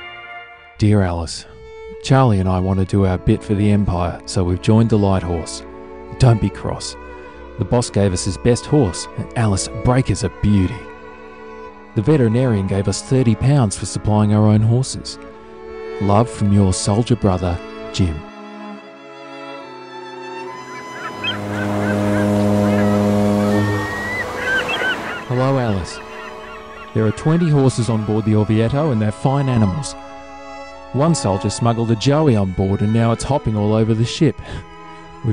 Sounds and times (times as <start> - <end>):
Music: 0.0 - 35.3
Speech: 0.8 - 7.0, 7.6 - 10.9, 12.0 - 15.2, 16.0 - 18.3, 25.3 - 26.0, 27.0 - 30.0, 30.9 - 34.6.